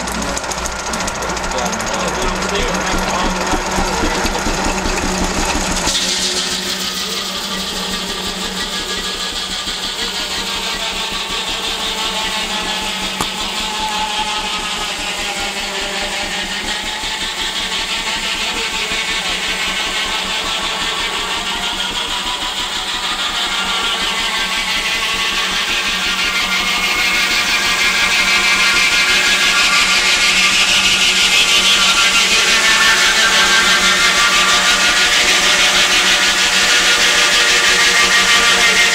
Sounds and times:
Medium engine (mid frequency): 0.0 - 38.9.

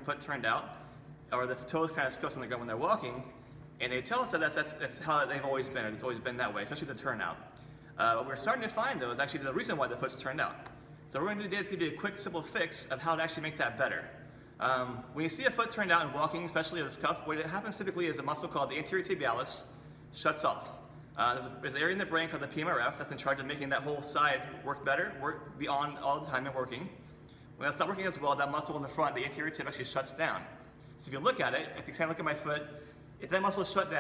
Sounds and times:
Speech: 0.0 - 27.0, 27.6 - 34.0.

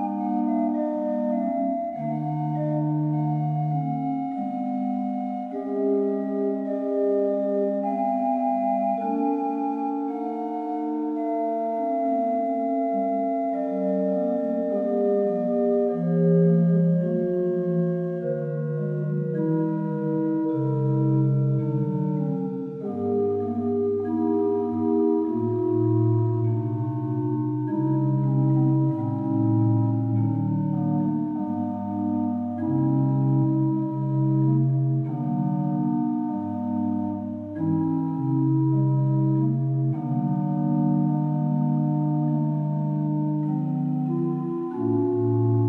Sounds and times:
Keyboard (musical): 0.0 - 45.6.

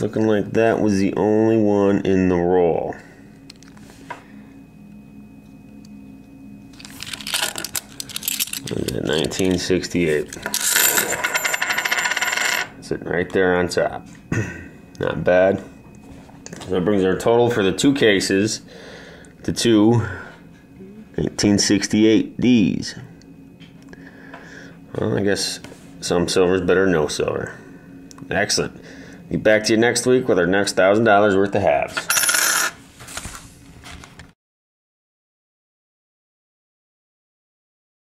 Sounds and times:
Coin (dropping): 6.8 - 8.8, 10.4 - 12.7, 32.0 - 32.8.

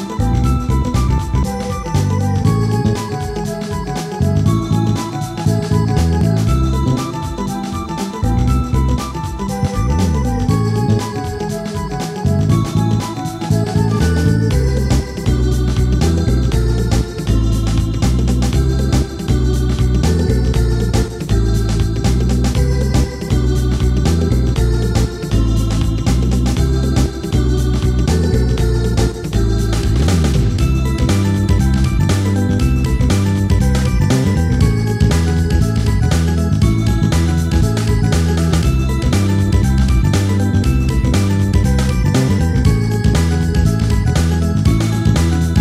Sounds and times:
Music: 0.0 - 45.6.

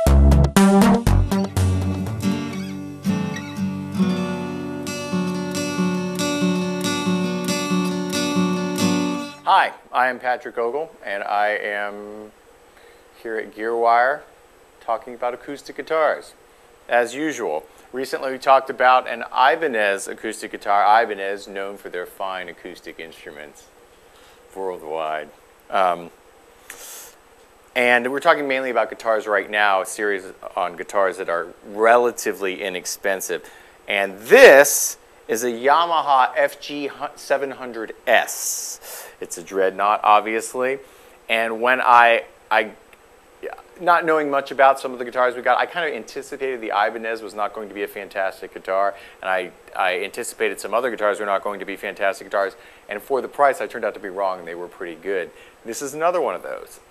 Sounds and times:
Speech: 9.5 - 12.4, 13.2 - 23.7, 24.5 - 26.2, 27.8 - 42.8, 43.4 - 56.9.

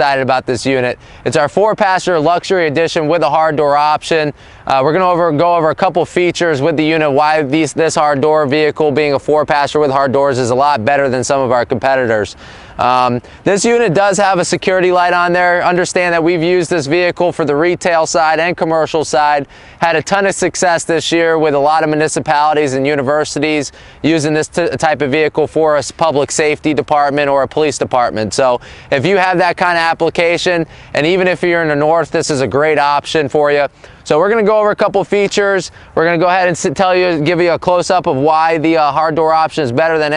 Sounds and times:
Speech: 0.0 - 40.1.

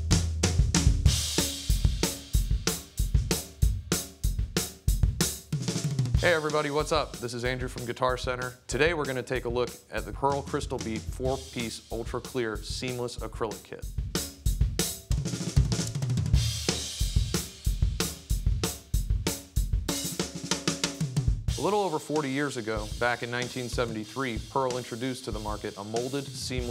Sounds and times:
Bass drum: 0.0 - 26.7
Drum kit: 0.0 - 26.7
Snare drum: 0.0 - 26.7
Speech: 6.2 - 13.9, 21.6 - 26.7.

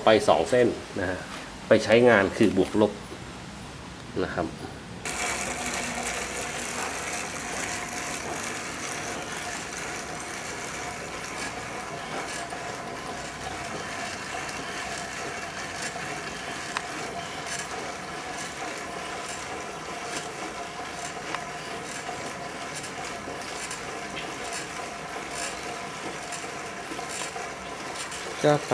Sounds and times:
Bicycle: 5.1 - 28.7.

